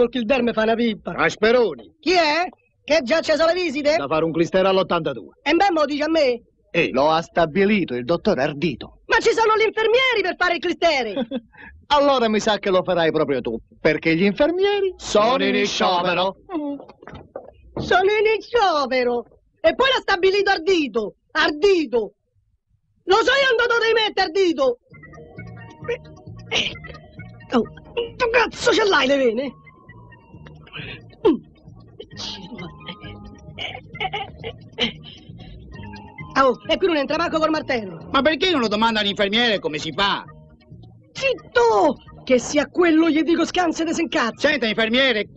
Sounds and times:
Music: 0:00.0 - 0:22.1, 0:23.0 - 0:45.3.

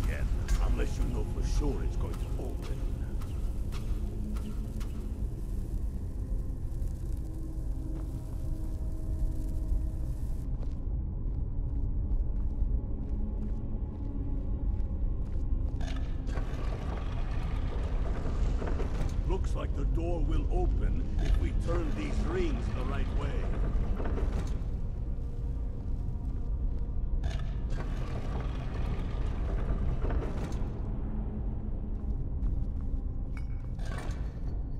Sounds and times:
Speech: 0:00.0 - 0:03.1, 0:19.3 - 0:23.5.

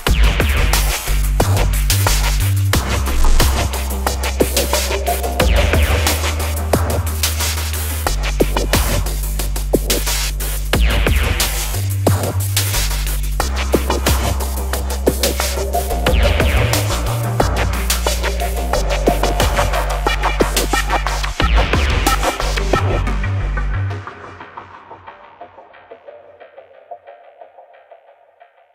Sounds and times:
Electronic music: 0:00.0 - 0:28.7.

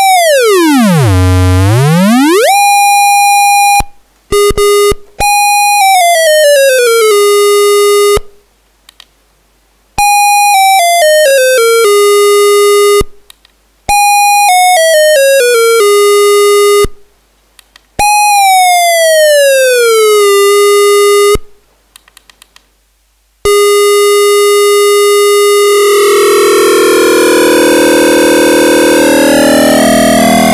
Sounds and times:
Sampler: 0:00.0 - 0:03.1, 0:23.5 - 0:30.5.

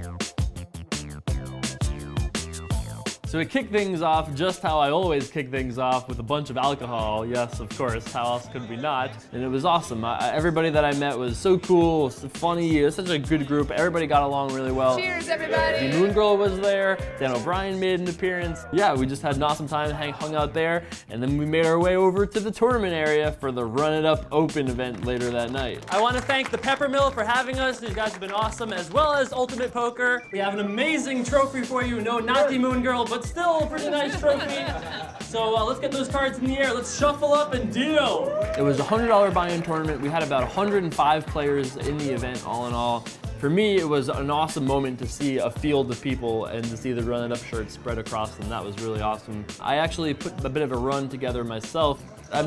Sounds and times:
Music: 0:00.0 - 0:52.4
Speech: 0:03.3 - 0:52.4.

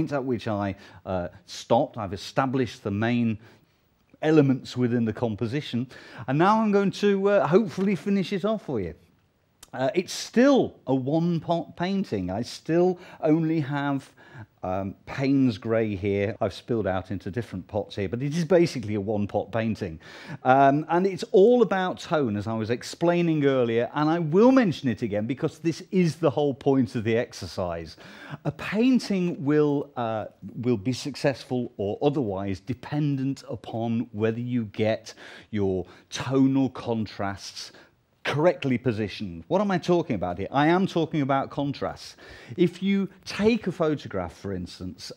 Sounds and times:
Speech: 0:00.0 - 0:03.4, 0:04.2 - 0:45.1.

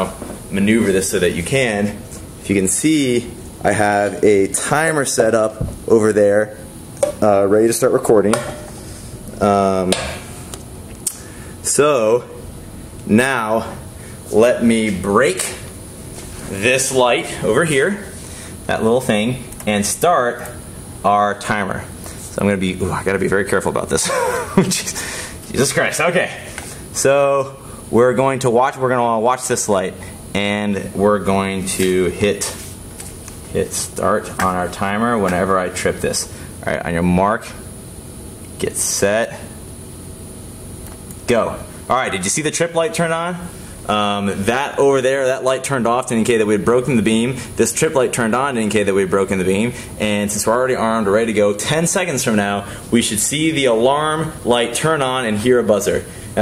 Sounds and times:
Speech: 0:00.0 - 0:08.6, 0:09.4 - 0:10.2, 0:11.6 - 0:12.4, 0:13.1 - 0:15.7, 0:16.5 - 0:32.6, 0:33.5 - 0:37.7, 0:38.6 - 0:39.6, 0:41.3 - 0:56.4.

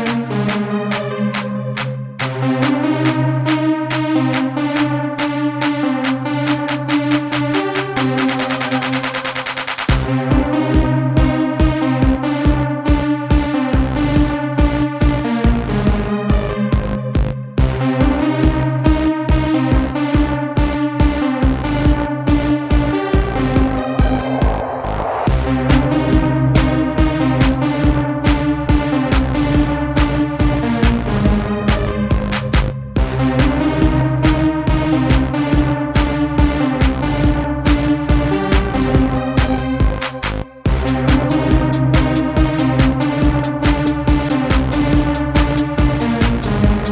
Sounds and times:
Techno: 0:00.0 - 0:46.9.

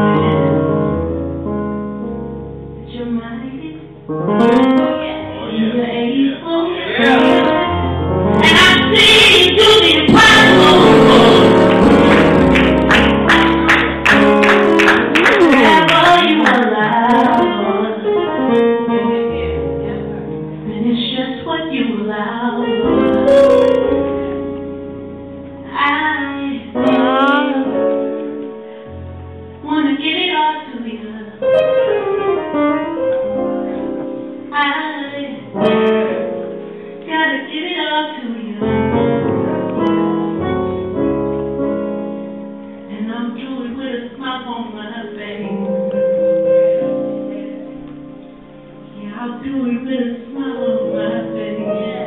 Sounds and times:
Inside, large room or hall: 0:00.0 - 0:52.0
Inside, public space: 0:00.0 - 0:52.0
Keyboard (musical): 0:00.0 - 0:52.0.

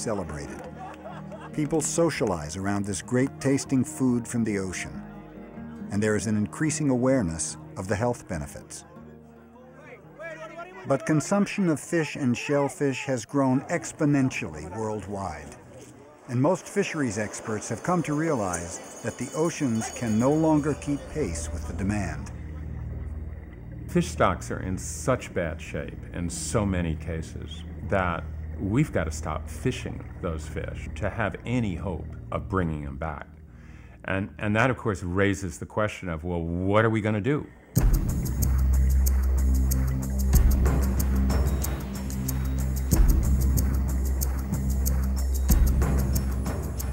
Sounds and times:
Speech: 0:00.0 - 0:00.6, 0:01.6 - 0:05.0, 0:05.9 - 0:09.0, 0:09.6 - 0:22.4, 0:23.9 - 0:33.3, 0:34.0 - 0:37.5
Music: 0:00.0 - 0:12.3, 0:16.8 - 0:34.7, 0:37.8 - 0:46.9.

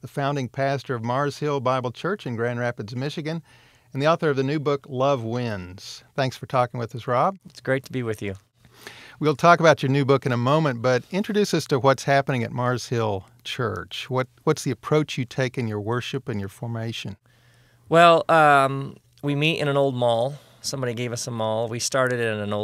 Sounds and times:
Speech: 0:00.0 - 0:03.4, 0:04.0 - 0:08.4, 0:09.2 - 0:17.2, 0:17.9 - 0:22.6.

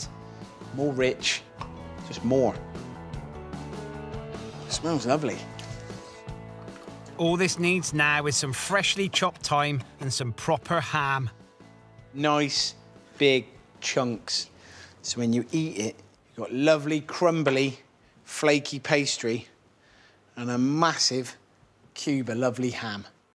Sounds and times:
Speech: 0:00.7 - 0:01.5, 0:02.1 - 0:02.6, 0:04.7 - 0:05.5, 0:07.2 - 0:11.3, 0:12.2 - 0:19.6, 0:20.4 - 0:21.4, 0:22.0 - 0:23.2.

